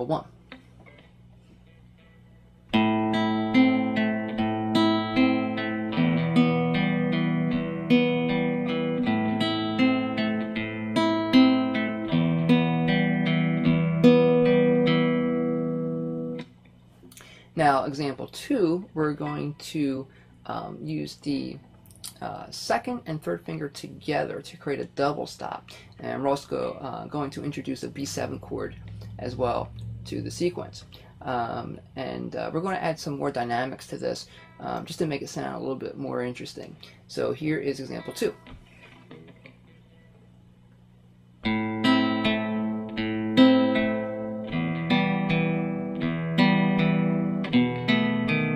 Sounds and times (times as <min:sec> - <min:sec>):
Strum: 0:00.5 - 0:16.6, 0:26.0 - 0:32.3, 0:41.4 - 0:48.5.